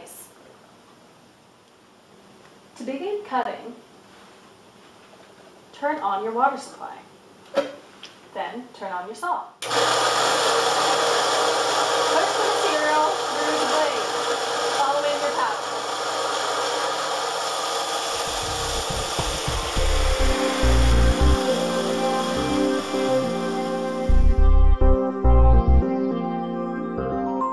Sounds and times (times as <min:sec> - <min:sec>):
Speech: 0:02.8 - 0:03.8, 0:05.8 - 0:07.1, 0:08.3 - 0:09.6, 0:12.1 - 0:14.1, 0:14.8 - 0:15.6
Music: 0:18.4 - 0:27.5.